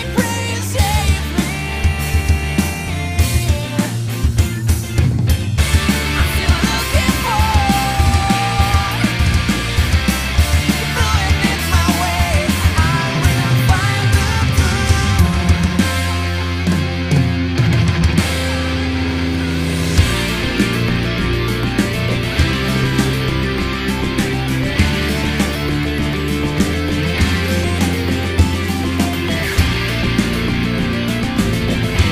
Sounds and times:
Bass drum: 0.0s - 18.6s, 19.4s - 32.1s
Drum kit: 0.0s - 32.1s
Heavy metal: 0.0s - 32.1s.

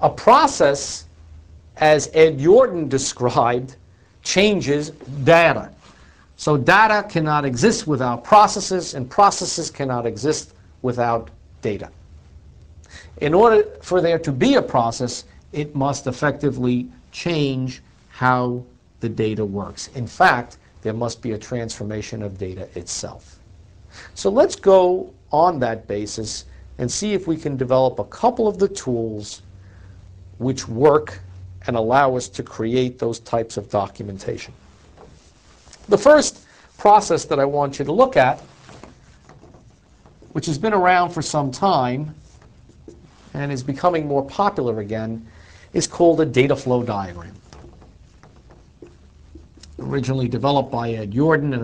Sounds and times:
Speech: 0.0s - 1.1s, 1.8s - 5.8s, 6.4s - 12.0s, 13.2s - 23.4s, 24.2s - 29.5s, 30.4s - 34.6s, 35.8s - 38.5s, 40.3s - 42.2s, 43.3s - 47.4s, 49.6s - 51.6s.

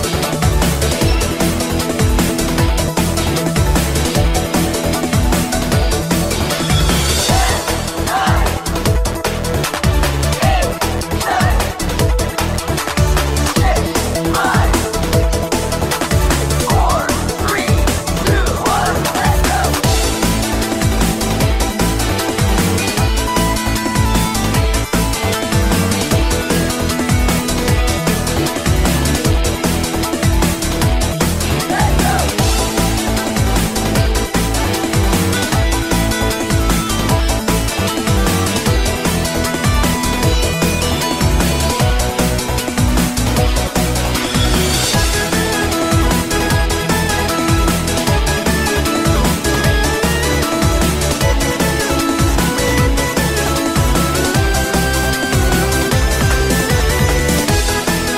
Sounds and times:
Music: 0.0s - 58.1s.

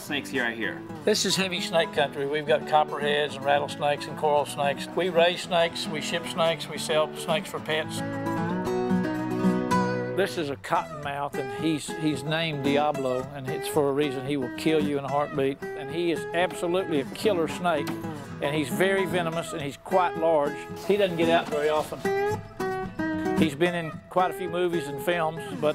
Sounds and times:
Speech: 0.0s - 8.0s, 10.2s - 17.8s, 18.4s - 22.1s, 23.4s - 25.7s
Music: 0.0s - 25.7s.

